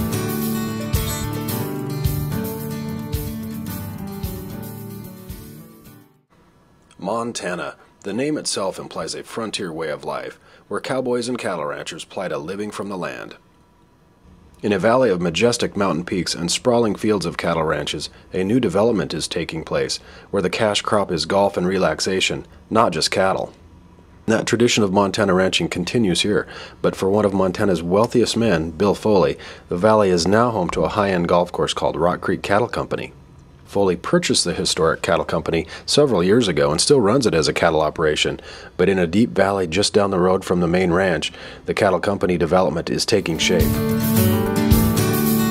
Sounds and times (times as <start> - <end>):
Speech: 6.9 - 13.4, 14.6 - 23.6, 24.3 - 43.8.